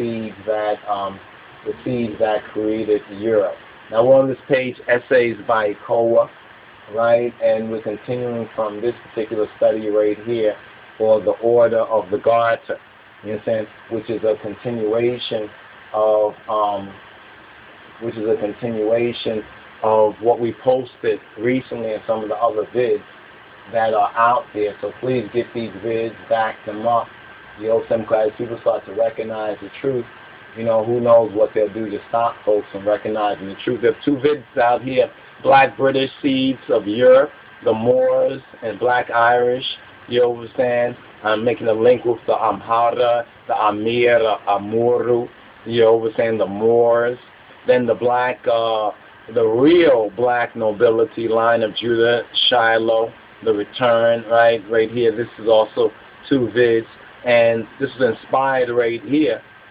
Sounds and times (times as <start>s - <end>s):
Speech: 0.0s - 17.0s, 18.0s - 23.1s, 23.7s - 59.4s.